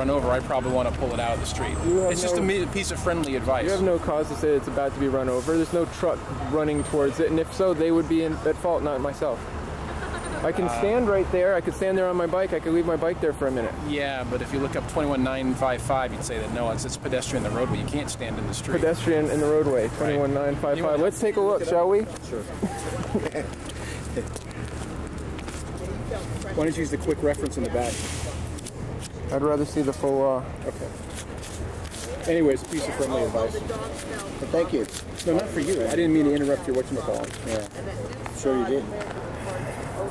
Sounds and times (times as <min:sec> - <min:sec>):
Vehicle: 0:00.0 - 0:40.1.